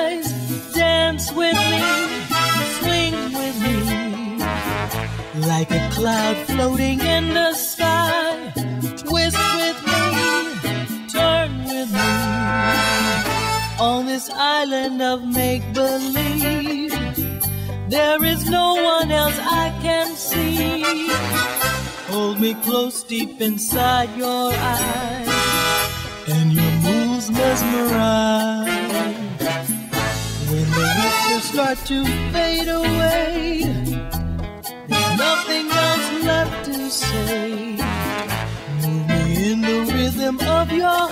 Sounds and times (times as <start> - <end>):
Music: 0.0 - 41.1.